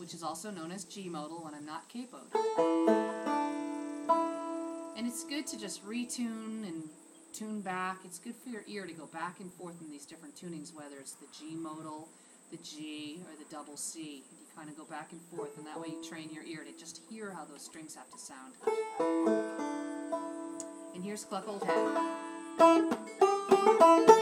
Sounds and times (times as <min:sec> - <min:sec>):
Speech: 0:00.0 - 0:02.3, 0:05.0 - 0:18.6, 0:20.9 - 0:21.8
Banjo: 0:02.3 - 0:07.0, 0:15.2 - 0:16.7, 0:17.5 - 0:24.2.